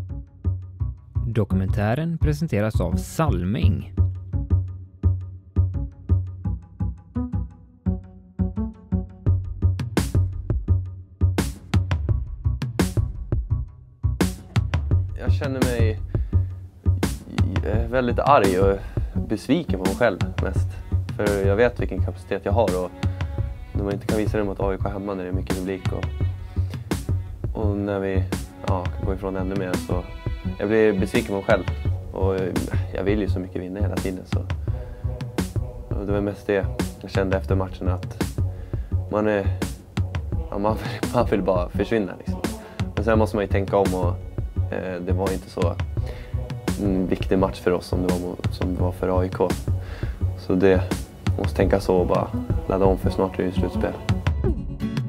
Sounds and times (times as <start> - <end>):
Music: 0.0 - 55.0
Speech: 1.2 - 4.0, 15.2 - 16.0, 17.2 - 23.0, 23.8 - 26.1, 27.6 - 34.5, 35.9 - 38.3, 39.1 - 39.6, 40.4 - 45.8, 46.8 - 49.6, 50.4 - 54.0.